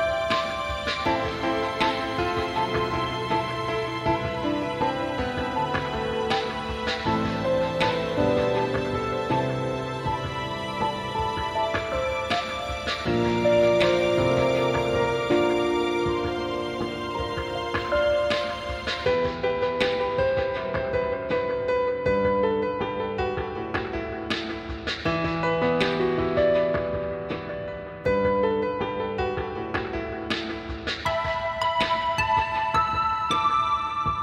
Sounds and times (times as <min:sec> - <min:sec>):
Music: 0:00.0 - 0:34.2.